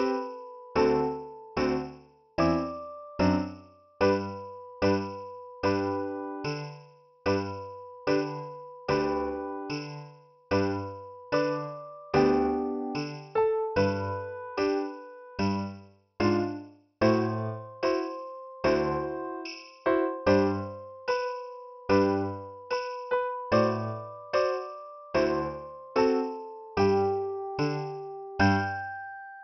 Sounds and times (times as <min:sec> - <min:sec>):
Music: 0:00.0 - 0:29.4.